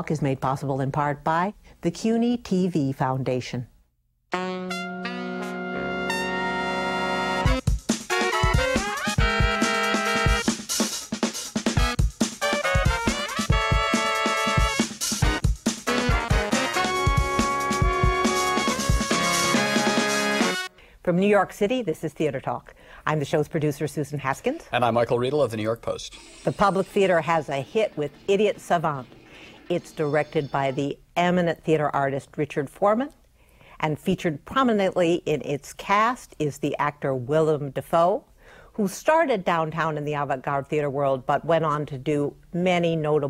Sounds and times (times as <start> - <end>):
Speech: 0.0 - 3.7, 21.1 - 29.0, 29.7 - 33.2, 33.8 - 38.2, 38.8 - 43.3
Music: 4.3 - 20.7, 26.0 - 30.8.